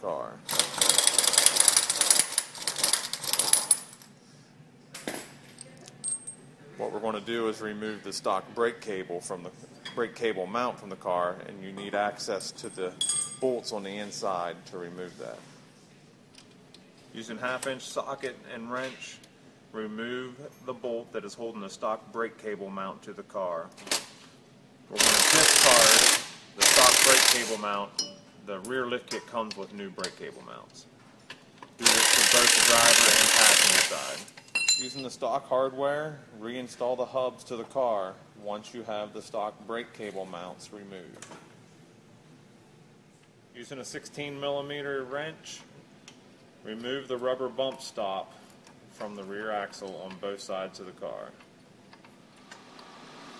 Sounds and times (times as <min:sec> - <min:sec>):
Speech: 0:00.0 - 0:00.4, 0:06.7 - 0:15.4, 0:17.1 - 0:19.2, 0:19.8 - 0:23.7, 0:26.6 - 0:30.9, 0:31.8 - 0:41.2, 0:43.6 - 0:45.7, 0:46.6 - 0:48.3, 0:49.0 - 0:51.4.